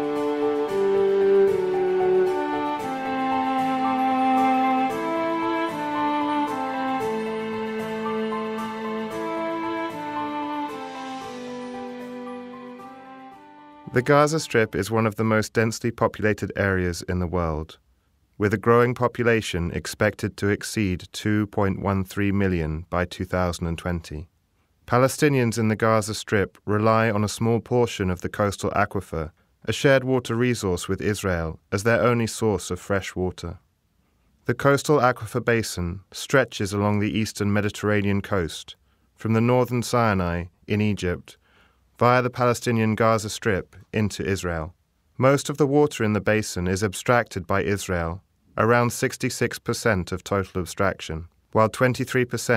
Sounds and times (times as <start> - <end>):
Speech: 13.9 - 17.8, 18.4 - 24.3, 24.9 - 33.6, 34.4 - 41.4, 42.0 - 52.5.